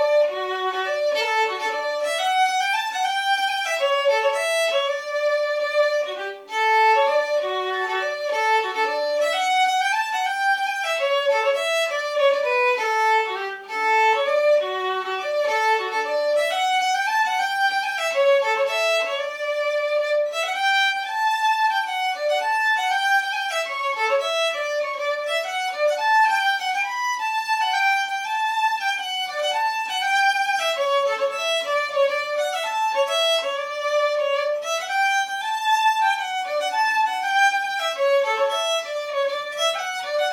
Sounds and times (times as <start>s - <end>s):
Violin, fiddle: 0.0s - 40.3s.